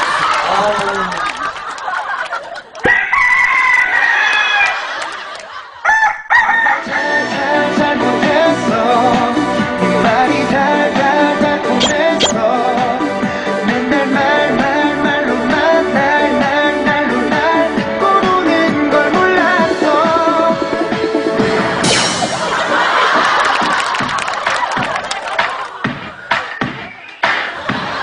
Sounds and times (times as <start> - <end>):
Music: 6.8 - 28.0.